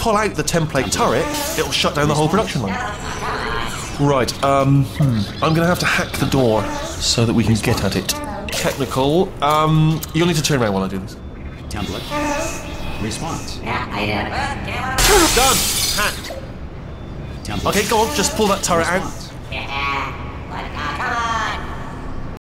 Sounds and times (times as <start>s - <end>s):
Speech: 0.0s - 3.0s, 4.0s - 12.2s, 17.4s - 21.9s.